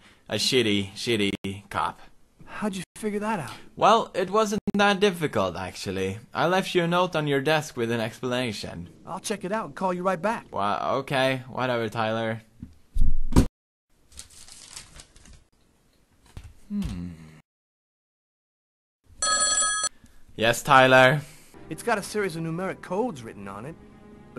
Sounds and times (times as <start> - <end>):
Telephone bell ringing: 19.2 - 19.9.